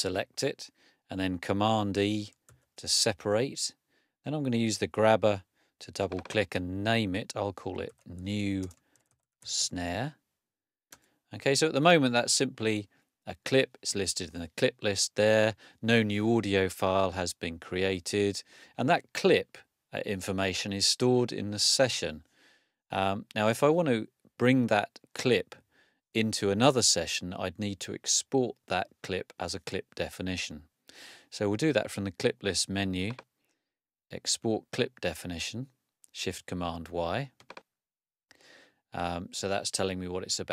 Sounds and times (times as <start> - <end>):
Speech: 0.0 - 8.8, 9.5 - 10.2, 11.3 - 22.2, 22.9 - 25.6, 26.2 - 30.7, 31.3 - 33.2, 34.1 - 37.4, 39.0 - 40.5.